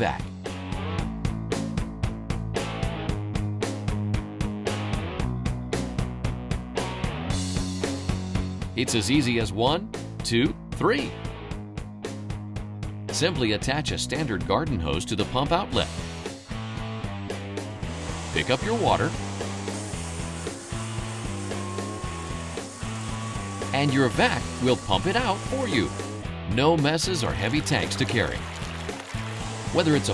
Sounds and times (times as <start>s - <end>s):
Speech: 0.0s - 0.3s, 8.8s - 11.2s, 13.1s - 16.0s, 18.4s - 19.2s, 23.7s - 28.4s, 29.7s - 30.1s
Music: 0.0s - 30.1s.